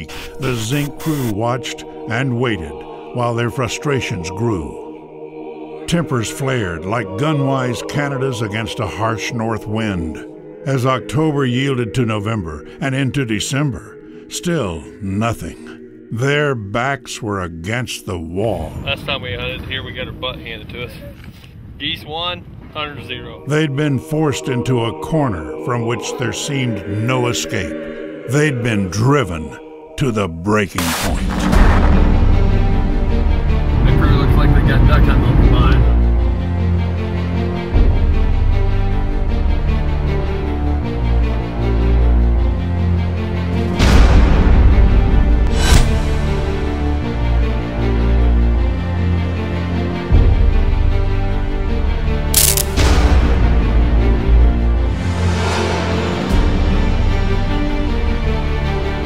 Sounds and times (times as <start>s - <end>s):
Speech: 0.0s - 4.8s, 5.9s - 21.2s, 21.8s - 31.4s, 33.8s - 35.8s
Music: 0.0s - 20.9s, 21.8s - 59.0s.